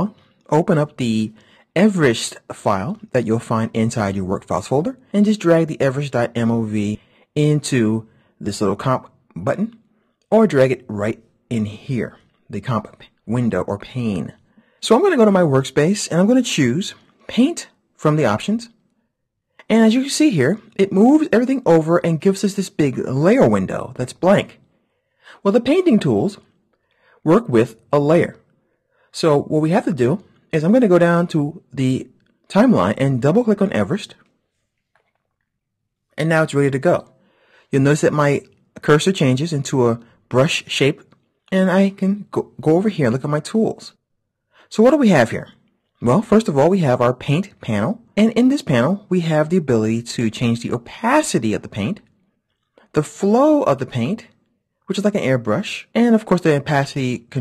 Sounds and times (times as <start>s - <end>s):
Speech: 0.0s - 18.8s, 19.6s - 24.6s, 25.3s - 26.4s, 27.2s - 28.4s, 29.1s - 34.2s, 36.2s - 37.1s, 37.7s - 44.0s, 44.7s - 52.1s, 52.9s - 54.3s, 54.9s - 57.4s.